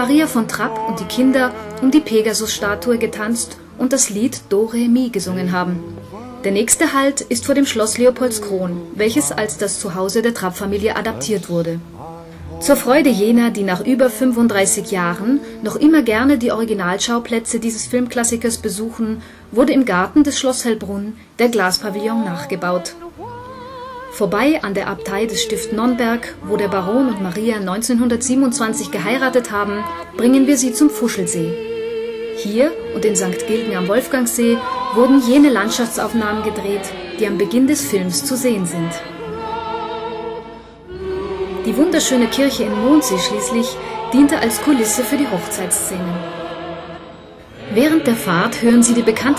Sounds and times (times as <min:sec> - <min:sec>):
Speech: 0:00.0 - 0:23.1, 0:24.1 - 0:31.6, 0:32.4 - 0:39.1, 0:41.7 - 0:46.2, 0:47.7 - 0:49.3
Music: 0:00.0 - 0:49.3.